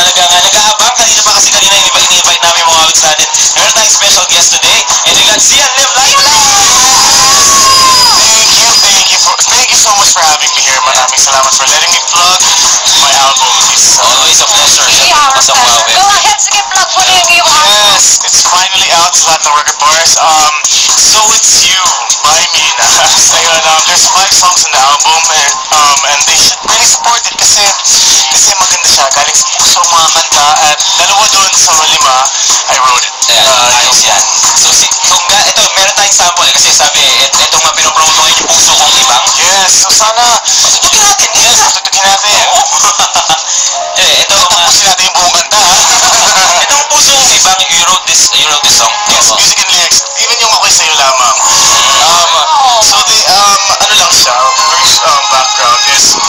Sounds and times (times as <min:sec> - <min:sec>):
Speech: 0:00.0 - 0:07.4, 0:08.0 - 0:43.3, 0:44.0 - 0:56.2
Music: 0:00.0 - 0:56.2
Radio: 0:00.0 - 0:56.2.